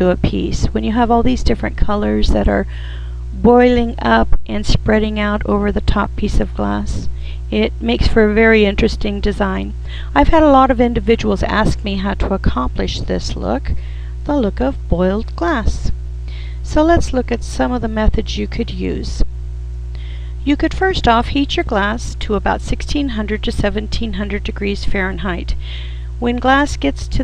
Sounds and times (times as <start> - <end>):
Speech: 0.0 - 19.3, 20.0 - 27.2.